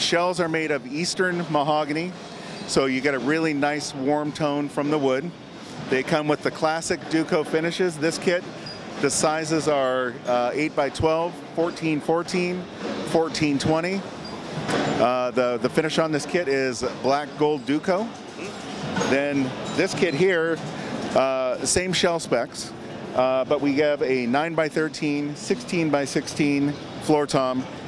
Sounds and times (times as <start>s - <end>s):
Speech: 0.0s - 14.1s, 15.0s - 20.6s, 21.2s - 27.7s.